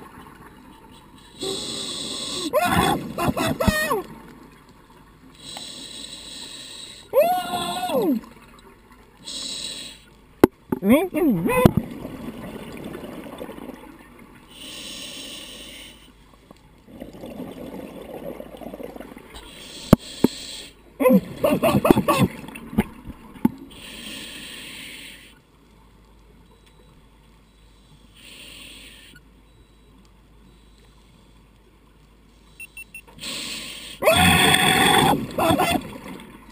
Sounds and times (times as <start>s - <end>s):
Speech: 10.8s - 11.7s.